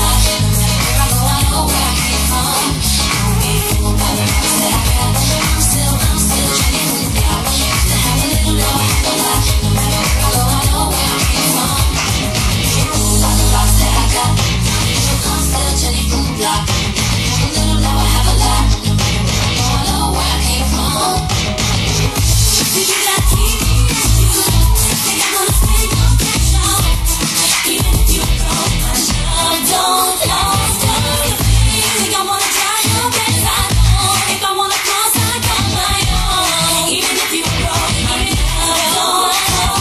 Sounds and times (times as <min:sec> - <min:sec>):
Disco: 0:00.0 - 0:39.8
Pop music: 0:00.0 - 0:39.8
Singing: 0:00.0 - 0:39.8.